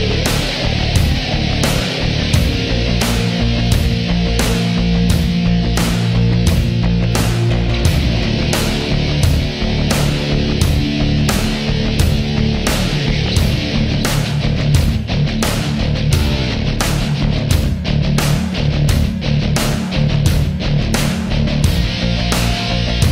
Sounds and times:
Music: 0.0 - 23.1.

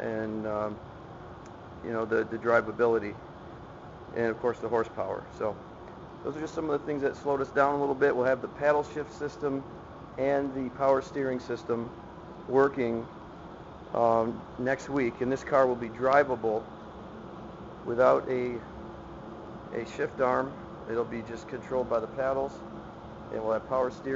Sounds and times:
Speech: 0.0 - 0.8, 1.8 - 3.2, 4.1 - 5.6, 6.3 - 11.9, 12.5 - 13.1, 14.0 - 16.6, 17.8 - 18.7, 19.7 - 22.6, 23.3 - 24.1.

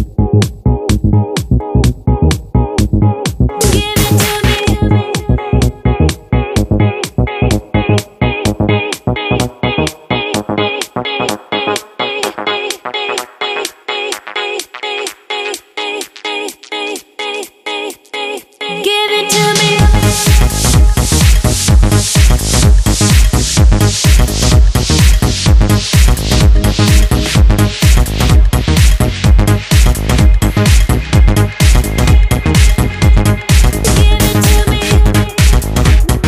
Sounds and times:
Music: 0.0 - 36.2.

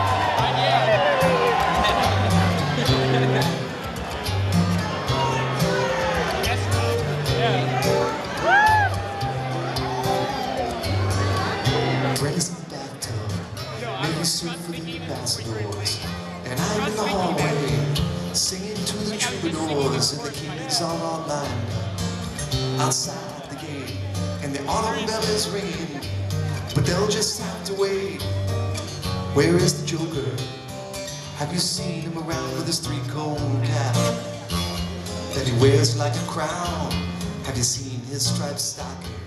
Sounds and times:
Blues: 0.0 - 39.2.

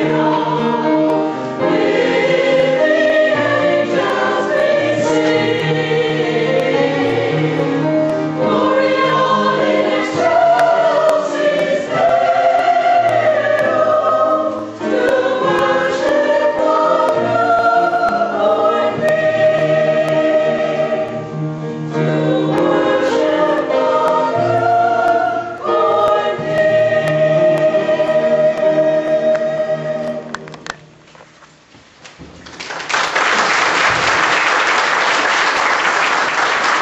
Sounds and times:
Choir: 0.0 - 30.5
Gospel music: 0.0 - 36.8.

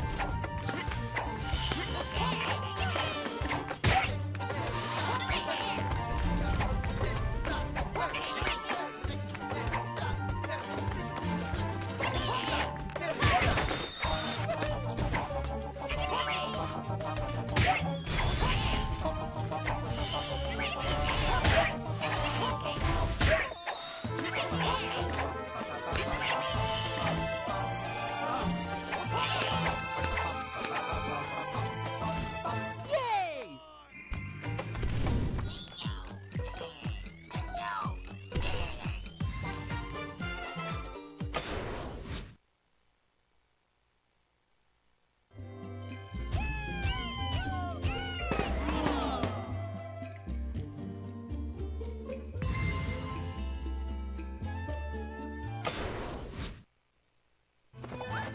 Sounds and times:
Music: 0.0 - 33.2, 33.9 - 41.6, 45.3 - 56.0, 57.8 - 58.3.

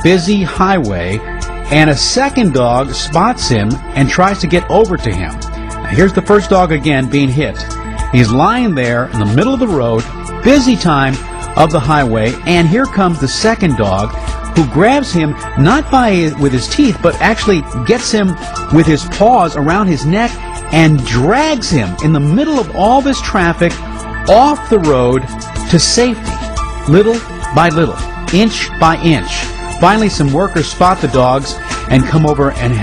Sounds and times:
Speech: 0.0 - 26.2, 26.9 - 32.8
Music: 0.0 - 32.8.

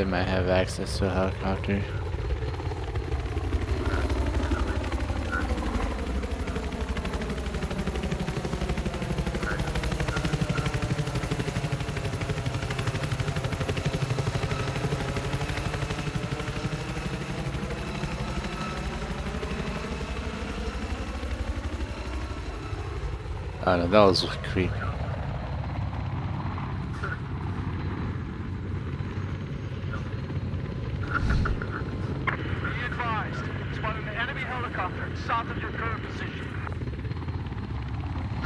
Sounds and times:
Speech: 0.0 - 2.0, 23.6 - 25.0, 32.6 - 36.7
Outside, rural or natural: 0.0 - 38.4.

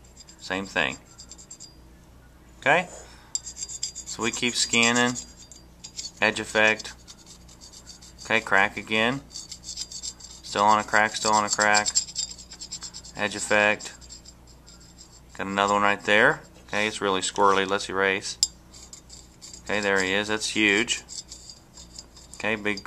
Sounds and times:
Speech: 0.4 - 1.0, 4.1 - 5.2, 6.2 - 7.0, 8.3 - 9.3, 10.5 - 12.0, 13.2 - 14.0, 15.4 - 18.4, 19.7 - 21.0, 22.4 - 22.8.

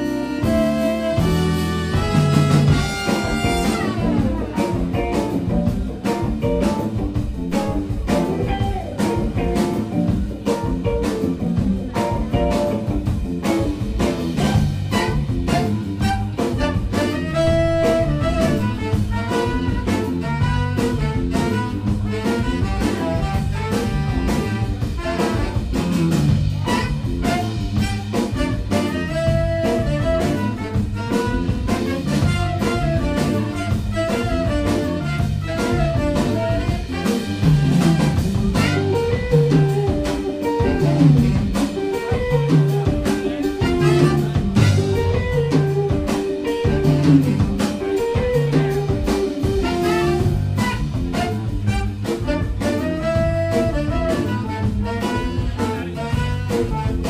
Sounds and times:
Blues: 0.0 - 57.0
Rock and roll: 0.0 - 57.0.

